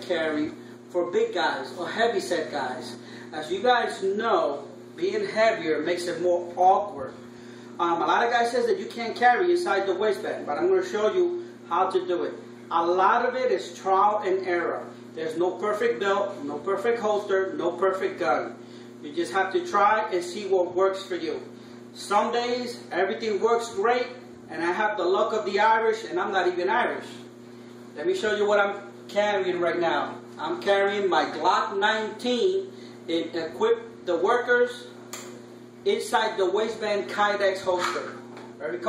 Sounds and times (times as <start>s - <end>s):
Speech: 0.0s - 7.2s, 7.8s - 27.3s, 28.0s - 35.0s, 35.8s - 38.8s.